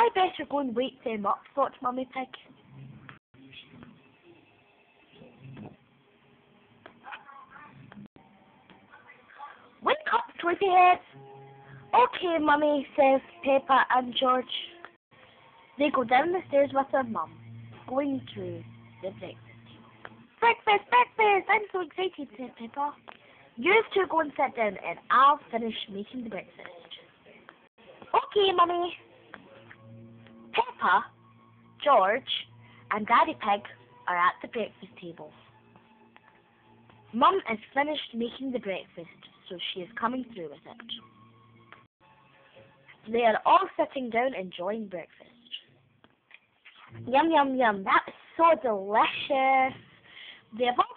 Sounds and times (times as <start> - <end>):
Speech: 0.0 - 2.5, 8.9 - 11.1, 11.9 - 14.8, 15.8 - 17.3, 17.9 - 19.4, 20.4 - 23.0, 23.6 - 29.0, 30.6 - 31.1, 31.8 - 35.4, 37.2 - 41.0, 43.1 - 45.6, 47.0 - 49.8, 50.6 - 50.9.